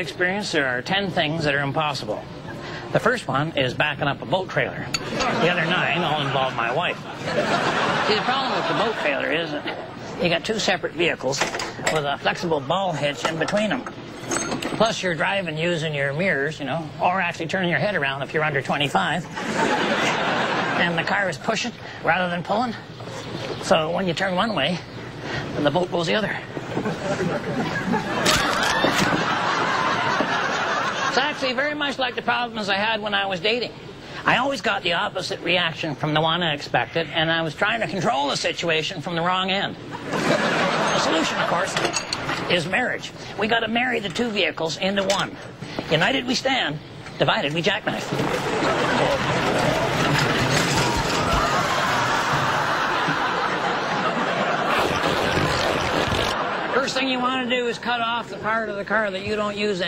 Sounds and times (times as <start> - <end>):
Speech: 0.0 - 2.3, 2.9 - 7.0, 8.0 - 13.9, 14.8 - 19.3, 20.7 - 22.8, 23.6 - 24.9, 25.6 - 26.5, 31.1 - 39.8, 41.0 - 48.2, 56.7 - 59.8.